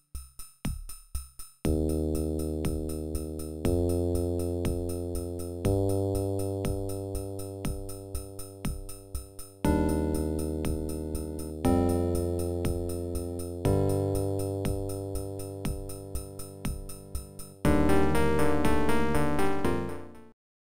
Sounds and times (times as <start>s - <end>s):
Music: 0.0s - 20.4s.